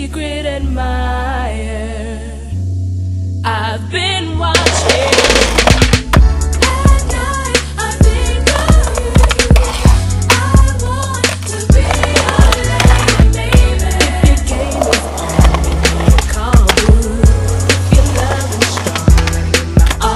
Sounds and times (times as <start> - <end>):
Music: 0.0 - 20.1
Skateboard: 4.6 - 7.4, 8.5 - 20.1.